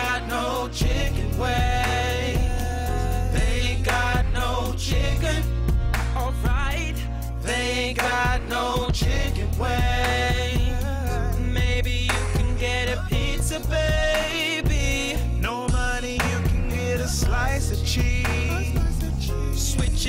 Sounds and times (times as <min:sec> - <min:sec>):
Music: 0:00.0 - 0:20.0.